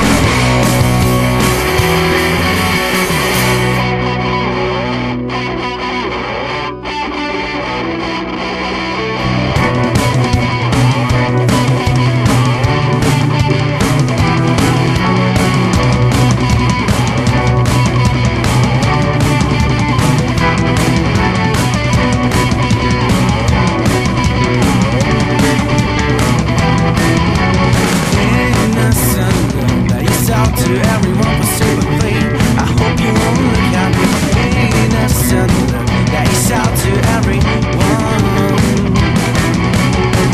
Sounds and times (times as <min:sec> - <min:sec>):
Music: 0:00.0 - 0:40.3
Singing: 0:28.2 - 0:39.0.